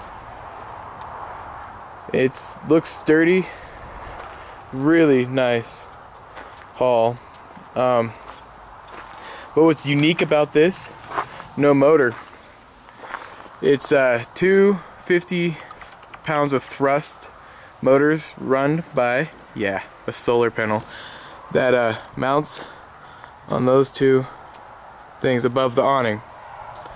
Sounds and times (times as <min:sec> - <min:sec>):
Speech: 0:02.1 - 0:03.6, 0:04.8 - 0:05.9, 0:06.8 - 0:07.2, 0:07.8 - 0:08.2, 0:09.6 - 0:11.0, 0:11.6 - 0:12.2, 0:13.6 - 0:20.9, 0:21.5 - 0:22.8, 0:23.5 - 0:24.4, 0:25.2 - 0:26.3.